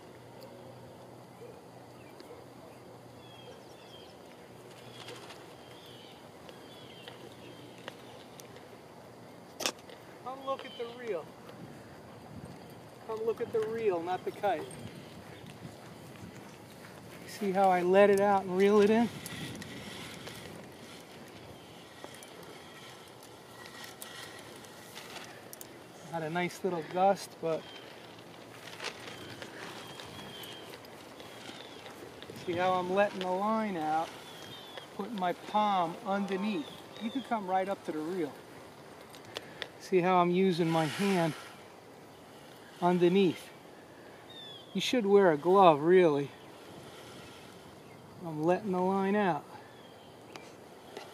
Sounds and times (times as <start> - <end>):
Mechanisms: 0.0 - 51.1.